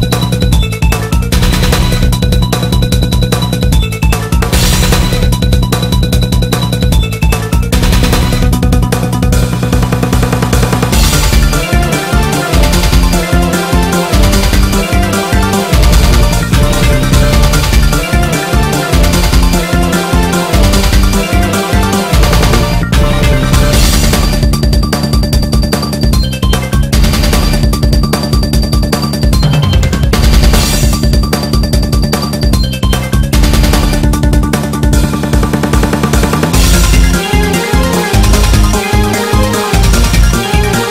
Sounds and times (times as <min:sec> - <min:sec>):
Video game music: 0:00.0 - 0:40.9.